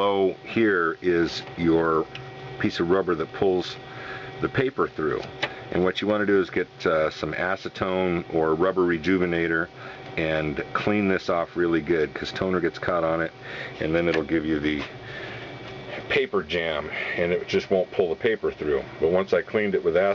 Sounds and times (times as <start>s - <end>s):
Speech: 0.0s - 3.8s, 4.4s - 15.0s, 16.0s - 20.1s.